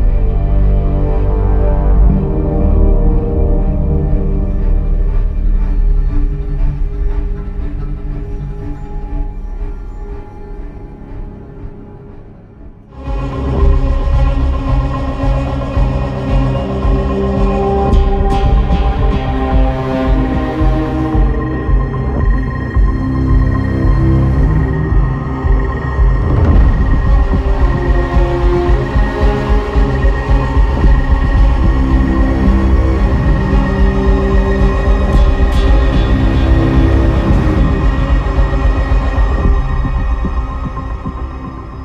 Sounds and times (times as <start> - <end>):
Music: 0.0 - 41.8.